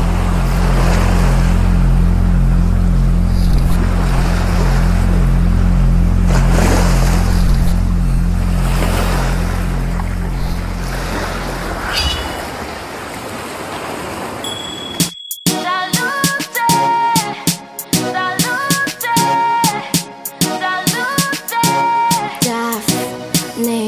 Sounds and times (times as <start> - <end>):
Outside, rural or natural: 0.0 - 23.8
Music: 15.0 - 23.8.